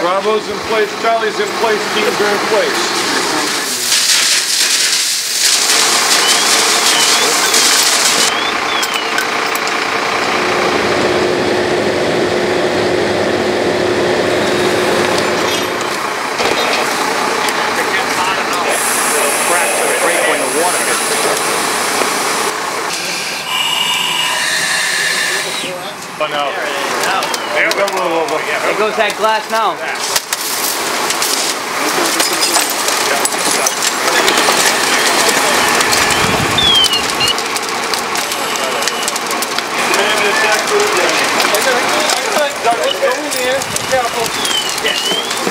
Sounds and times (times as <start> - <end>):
Speech: 0.0 - 3.9, 6.9 - 7.8, 17.4 - 21.6, 38.2 - 39.1, 39.8 - 45.5.